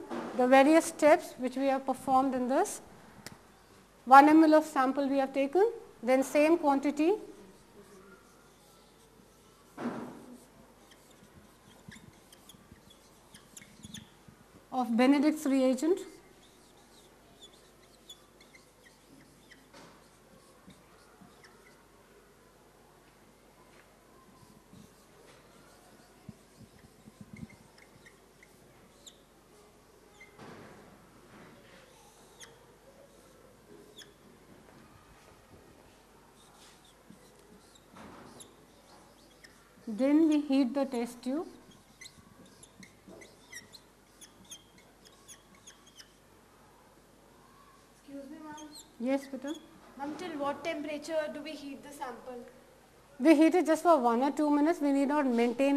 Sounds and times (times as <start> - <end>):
Inside, small room: 0.0 - 55.7.